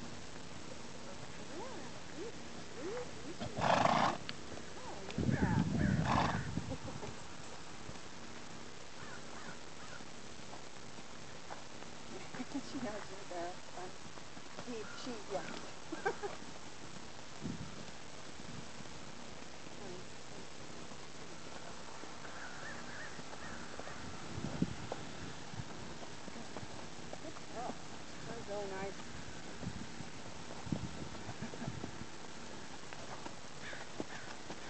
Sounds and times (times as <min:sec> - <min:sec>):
Clip-clop: 0:00.0 - 0:34.7
Speech: 0:04.8 - 0:06.1, 0:27.2 - 0:29.0.